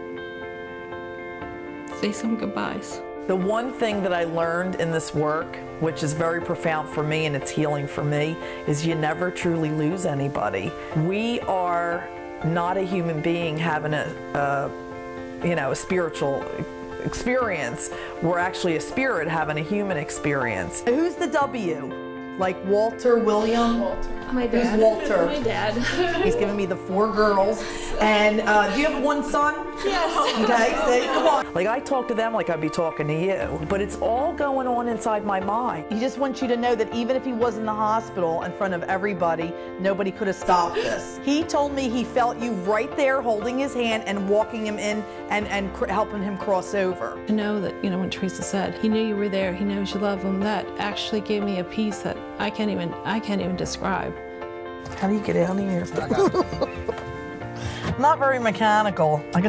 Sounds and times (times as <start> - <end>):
Music: 0.0 - 59.4.